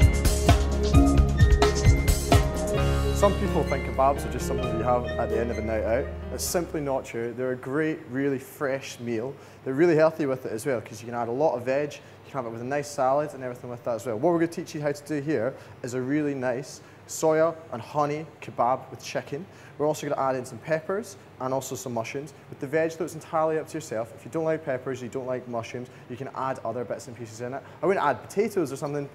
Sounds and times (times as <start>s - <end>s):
Speech: 3.2s - 29.1s.